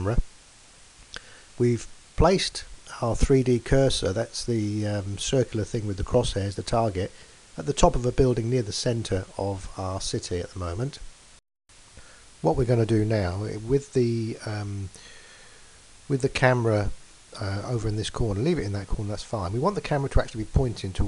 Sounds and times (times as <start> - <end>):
Speech: 0.0 - 0.3, 1.6 - 11.1, 12.4 - 15.0, 16.1 - 21.0.